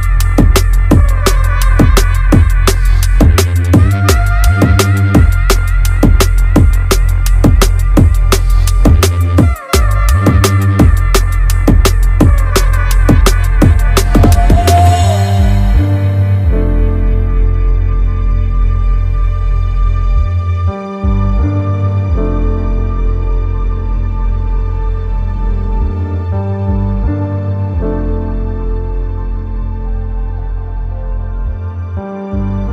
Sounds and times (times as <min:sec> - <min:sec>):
New-age music: 0:00.0 - 0:32.7.